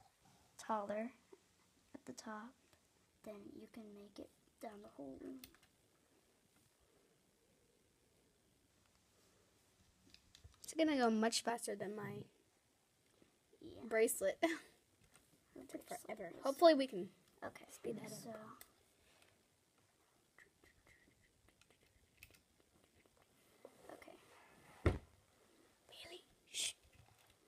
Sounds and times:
Inside, small room: 0:00.0 - 0:27.4
Speech: 0:03.2 - 0:05.5, 0:10.7 - 0:12.4, 0:15.6 - 0:18.6
Whispering: 0:20.3 - 0:22.0, 0:23.7 - 0:24.4, 0:25.9 - 0:26.8.

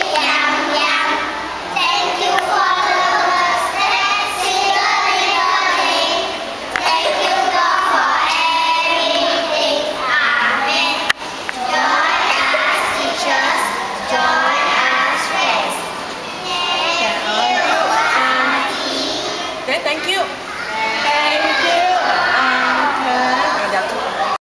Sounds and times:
Child singing: 0:00.0 - 0:19.7, 0:20.5 - 0:24.3
Speech: 0:19.7 - 0:24.4.

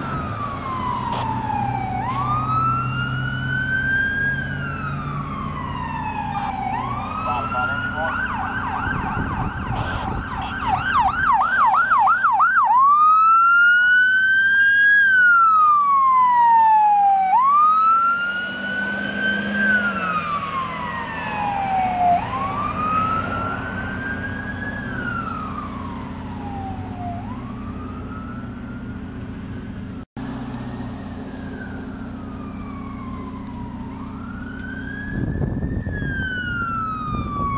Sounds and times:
Ambulance (siren): 0:00.0 - 0:29.3, 0:30.0 - 0:37.5
Police car (siren): 0:00.0 - 0:37.5.

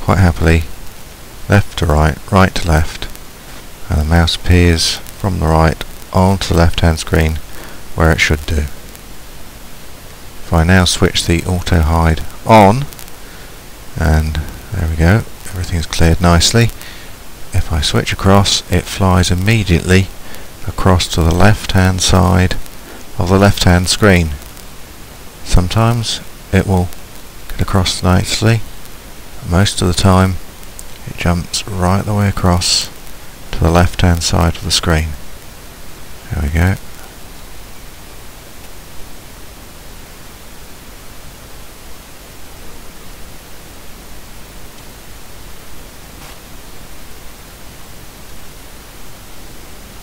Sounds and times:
Speech: 0:00.0 - 0:00.7, 0:01.5 - 0:03.2, 0:03.8 - 0:08.8, 0:10.5 - 0:13.0, 0:14.0 - 0:16.8, 0:17.5 - 0:24.5, 0:25.4 - 0:28.7, 0:29.4 - 0:30.4, 0:31.0 - 0:35.2, 0:36.2 - 0:37.0.

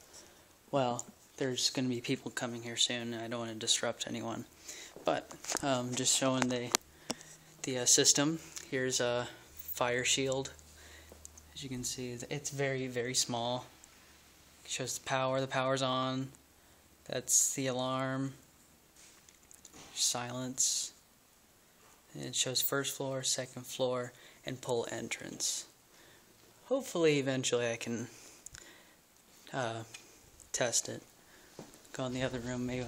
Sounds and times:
Speech: 0:00.7 - 0:06.8, 0:07.6 - 0:10.6, 0:11.5 - 0:13.7, 0:14.6 - 0:16.4, 0:17.1 - 0:18.4, 0:20.0 - 0:21.0, 0:22.1 - 0:25.8, 0:26.6 - 0:28.1, 0:29.5 - 0:31.1, 0:31.9 - 0:32.8.

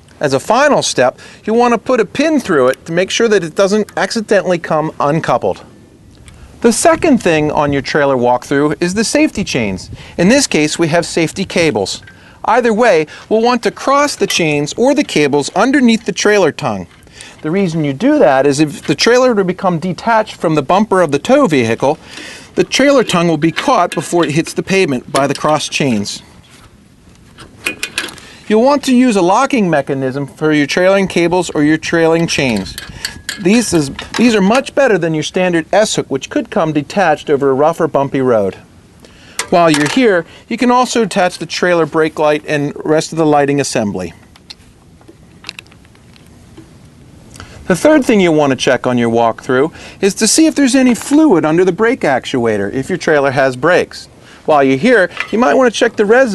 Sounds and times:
Speech: 0:00.2 - 0:05.7, 0:06.6 - 0:22.0, 0:22.6 - 0:26.3, 0:28.5 - 0:32.8, 0:33.4 - 0:38.7, 0:39.5 - 0:44.2, 0:47.7 - 0:56.3.

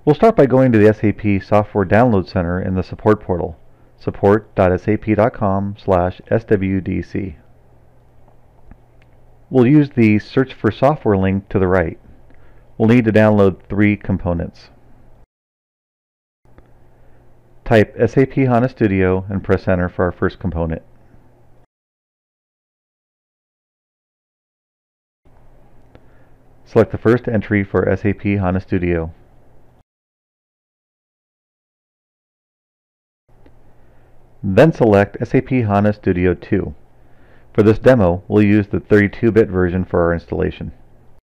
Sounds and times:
Speech: 0:00.0 - 0:07.5, 0:09.5 - 0:12.0, 0:12.8 - 0:14.8, 0:17.6 - 0:20.9, 0:26.7 - 0:29.2, 0:34.4 - 0:36.8, 0:37.6 - 0:40.8.

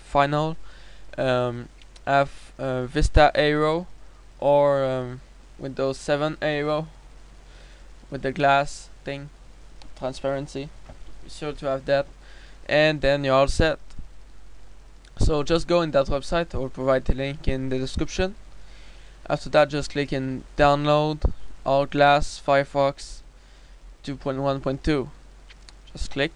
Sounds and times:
Speech: 0:00.0 - 0:00.6, 0:01.2 - 0:07.0, 0:08.1 - 0:09.4, 0:10.0 - 0:12.1, 0:12.7 - 0:13.8, 0:15.2 - 0:18.4, 0:19.3 - 0:23.2, 0:24.0 - 0:25.2, 0:25.9 - 0:26.3.

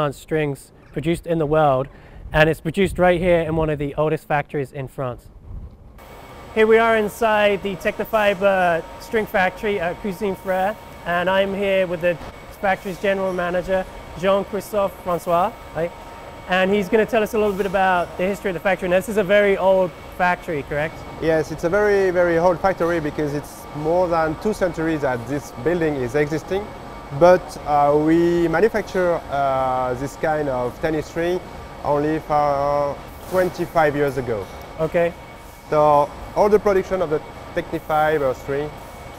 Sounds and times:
Speech: 0:00.0 - 0:05.3, 0:06.6 - 0:15.9, 0:16.5 - 0:38.8.

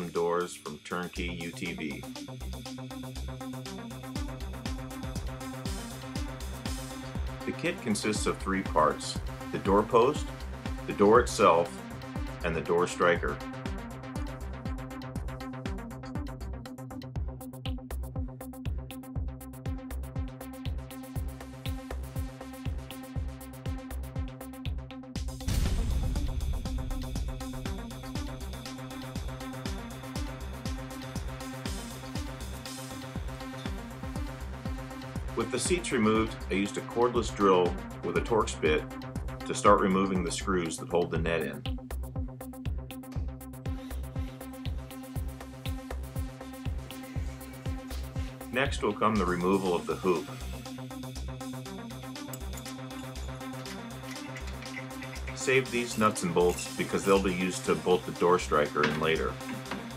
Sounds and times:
Music: 0:00.0 - 0:59.9.

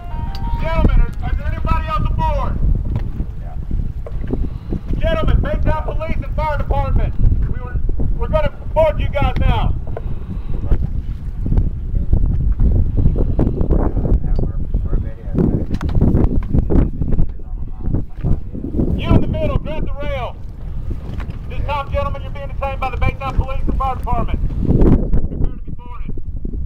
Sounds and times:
Sailboat, sailing ship: 0:00.0 - 0:26.6
Speech: 0:00.6 - 0:02.6, 0:05.0 - 0:09.8, 0:13.9 - 0:15.6, 0:16.9 - 0:20.4, 0:21.5 - 0:24.4, 0:25.3 - 0:26.2.

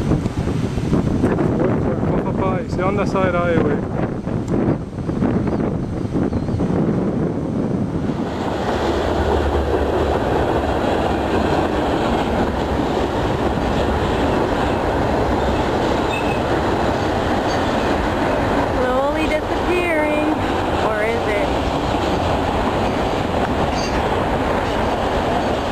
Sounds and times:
Railroad car, train wagon: 0:00.0 - 0:25.7
Speech: 0:18.8 - 0:21.5.

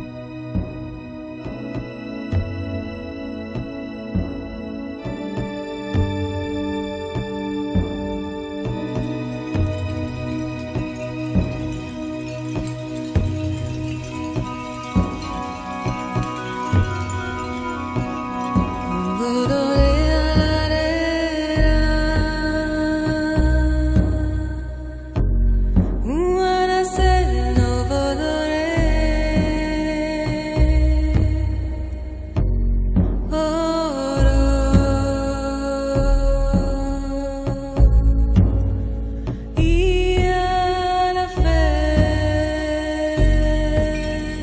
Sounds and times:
Background music: 0:00.0 - 0:44.4.

